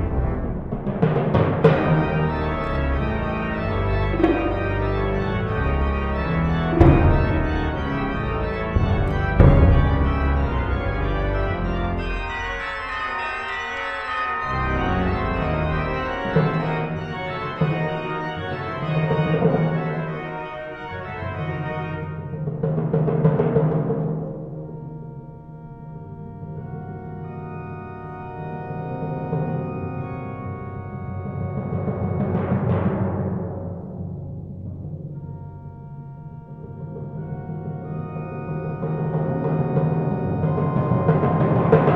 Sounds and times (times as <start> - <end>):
Marimba, xylophone: 4.1 - 4.8.